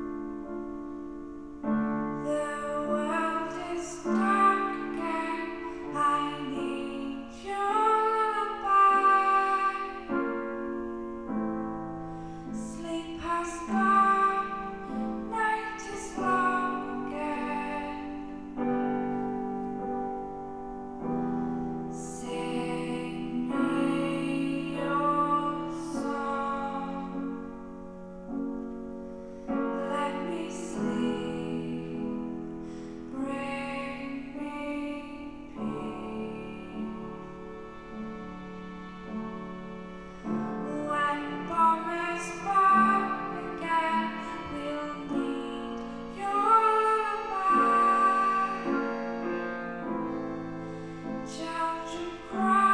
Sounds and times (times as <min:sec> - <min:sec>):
Lullaby: 0:00.0 - 0:52.7.